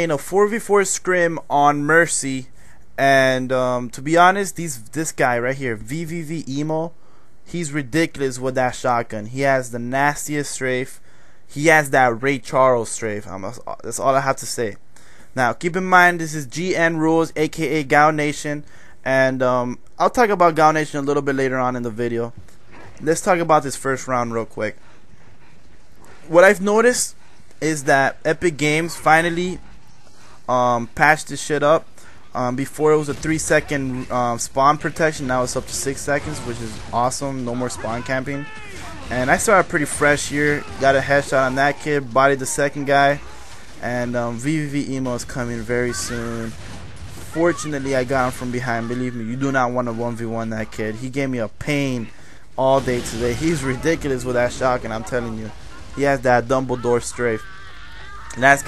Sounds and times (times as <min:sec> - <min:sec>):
Speech: 0:00.0 - 0:06.9, 0:07.5 - 0:14.8, 0:15.4 - 0:22.4, 0:23.0 - 0:24.8, 0:26.3 - 0:29.6, 0:30.5 - 0:46.6, 0:47.3 - 0:57.6, 0:58.3 - 0:58.6.